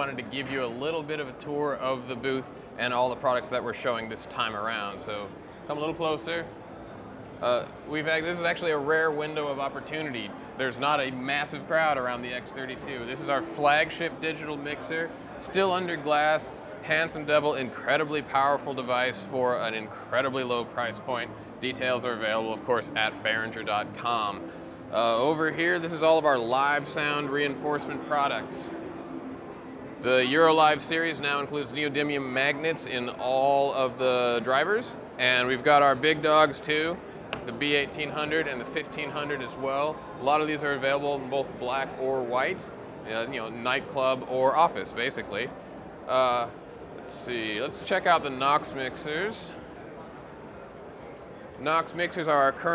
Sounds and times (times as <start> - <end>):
Speech: 0.0 - 6.6, 7.4 - 28.7, 30.0 - 45.5, 46.1 - 49.6, 51.6 - 52.7.